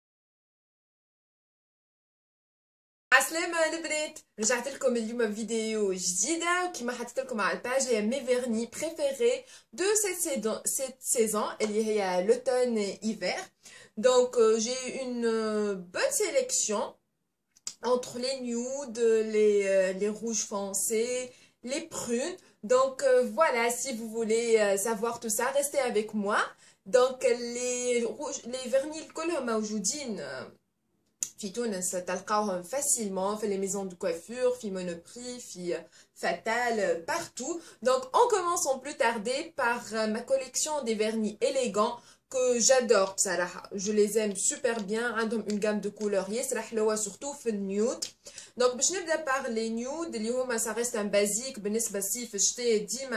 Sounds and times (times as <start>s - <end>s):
Speech: 3.1s - 17.0s, 17.7s - 30.6s, 31.2s - 53.1s.